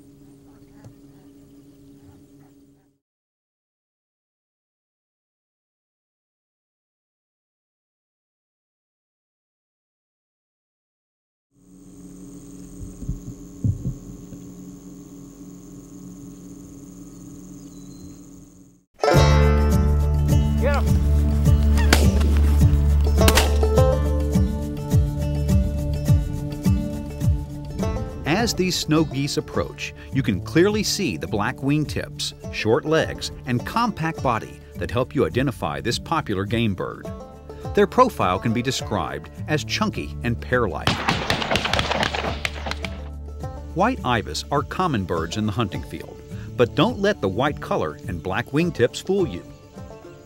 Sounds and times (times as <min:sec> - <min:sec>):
Bird: 0:17.1 - 0:18.5
Music: 0:19.0 - 0:50.2.